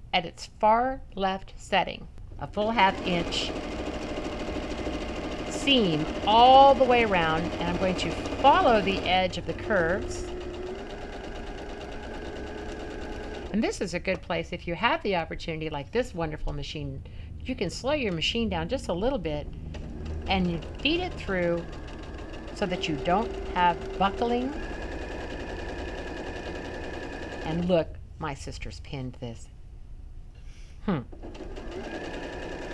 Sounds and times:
Speech: 0:00.2 - 0:03.5, 0:05.5 - 0:10.3, 0:13.5 - 0:19.4, 0:20.3 - 0:21.6, 0:22.6 - 0:24.6, 0:27.4 - 0:29.5
Sewing machine: 0:02.8 - 0:13.6, 0:19.7 - 0:27.7, 0:31.2 - 0:32.7.

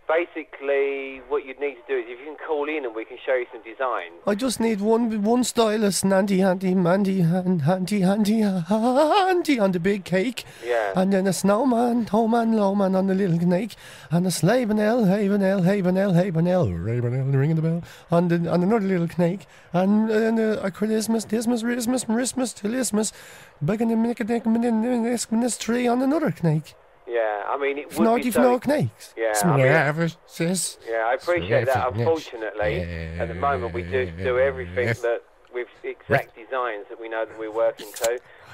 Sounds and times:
Speech: 0:00.0 - 0:38.5.

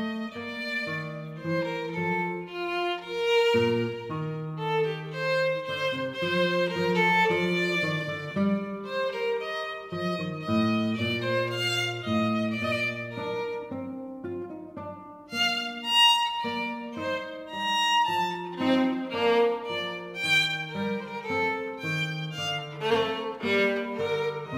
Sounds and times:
Violin, fiddle: 0:00.0 - 0:14.7, 0:15.3 - 0:24.5.

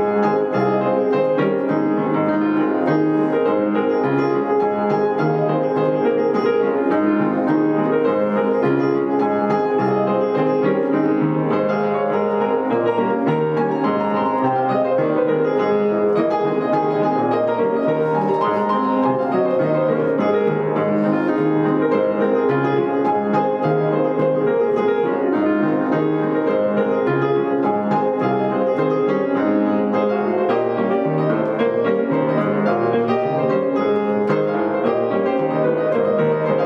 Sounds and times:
Piano: 0:00.0 - 0:36.6.

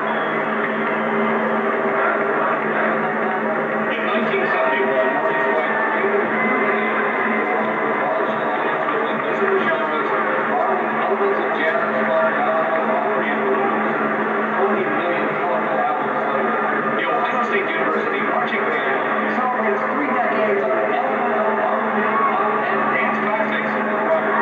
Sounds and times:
Speech: 0:00.0 - 0:24.4.

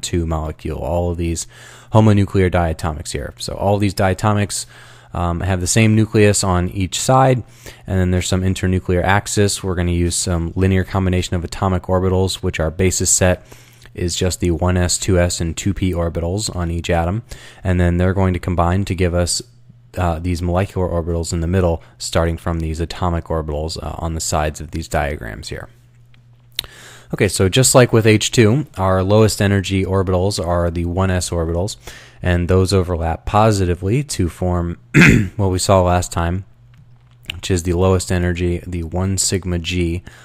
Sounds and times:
Speech: 0:00.0 - 0:25.8, 0:27.1 - 0:36.5, 0:37.3 - 0:40.1.

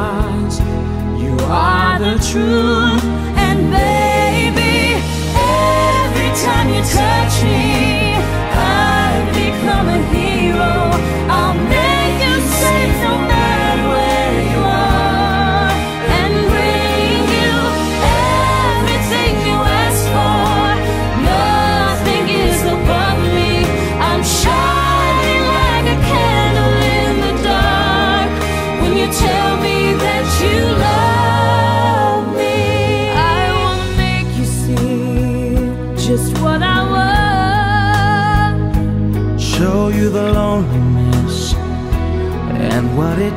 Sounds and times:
Pop music: 0:00.0 - 0:43.3.

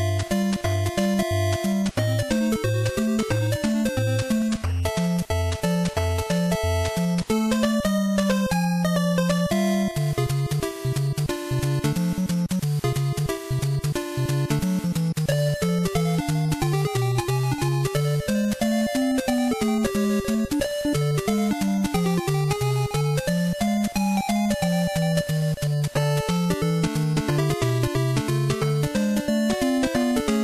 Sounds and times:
Music: 0:00.0 - 0:30.4.

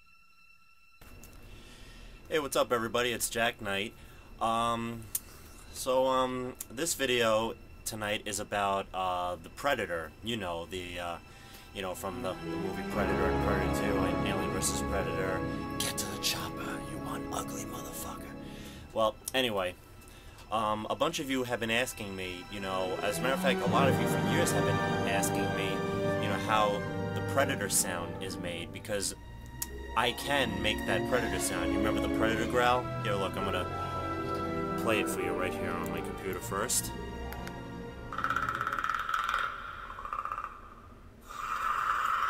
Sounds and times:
Music: 0:00.0 - 0:39.5
Speech: 0:02.3 - 0:05.1, 0:05.8 - 0:11.2, 0:11.8 - 0:18.3, 0:19.0 - 0:19.8, 0:20.5 - 0:29.2, 0:30.0 - 0:33.7, 0:34.8 - 0:37.0.

